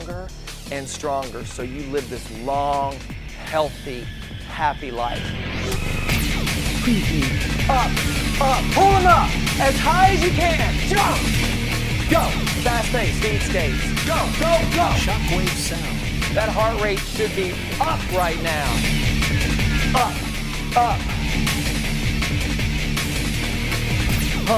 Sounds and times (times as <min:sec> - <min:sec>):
Speech: 0:00.0 - 0:05.2, 0:12.1 - 0:18.8
Music: 0:00.0 - 0:24.5.